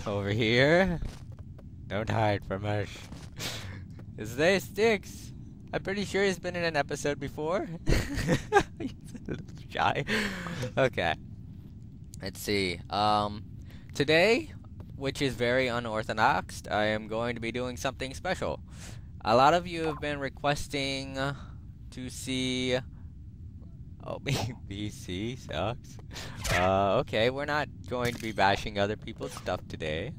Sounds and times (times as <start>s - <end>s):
Speech: 4.2s - 7.8s, 12.2s - 13.4s, 14.0s - 18.6s, 19.2s - 22.9s, 24.0s - 30.1s.